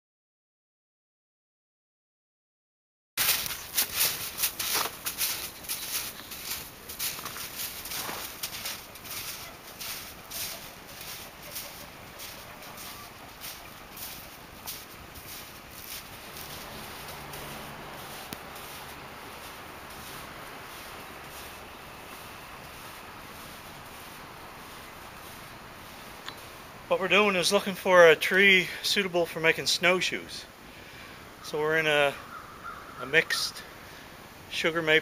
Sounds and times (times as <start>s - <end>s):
Speech: 26.9s - 30.5s, 31.4s - 32.2s, 33.0s - 33.7s, 34.5s - 35.0s.